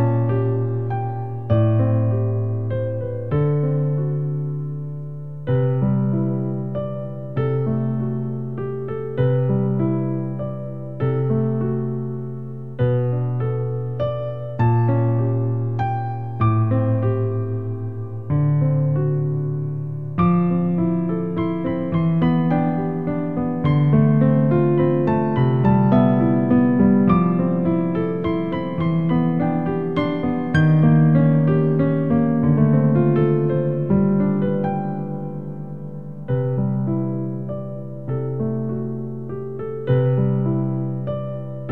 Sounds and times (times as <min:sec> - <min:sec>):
Music: 0:00.0 - 0:41.7.